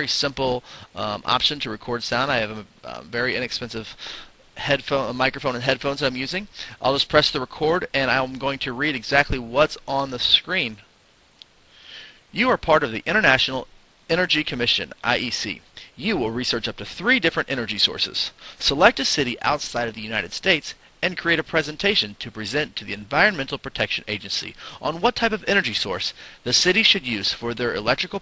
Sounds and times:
Speech: 0.0s - 4.0s, 4.6s - 10.9s, 12.3s - 28.2s.

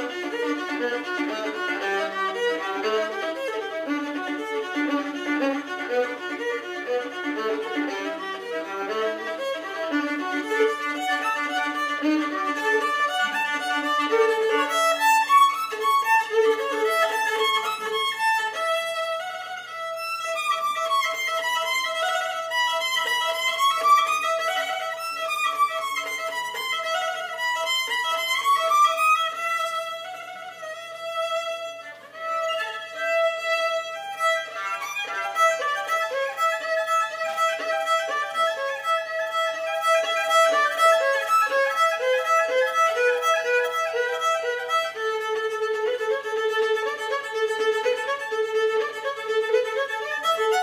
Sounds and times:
Violin, fiddle: 0.0s - 50.6s.

